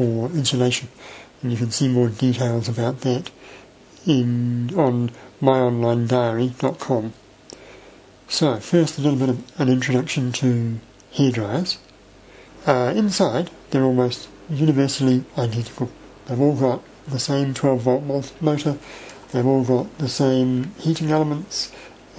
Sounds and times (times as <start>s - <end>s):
Speech: 0.0s - 3.4s, 4.0s - 7.2s, 8.3s - 11.9s, 12.6s - 22.1s.